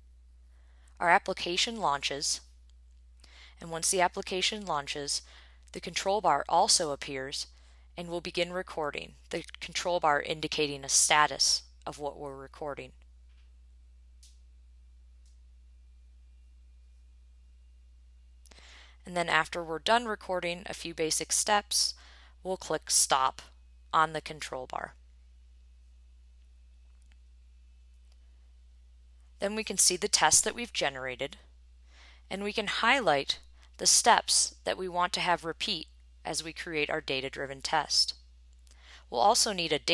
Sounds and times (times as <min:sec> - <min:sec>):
Speech: 0:01.0 - 0:02.4, 0:03.6 - 0:05.2, 0:05.8 - 0:13.0, 0:19.0 - 0:25.0, 0:29.4 - 0:31.4, 0:32.3 - 0:38.2, 0:39.1 - 0:39.9.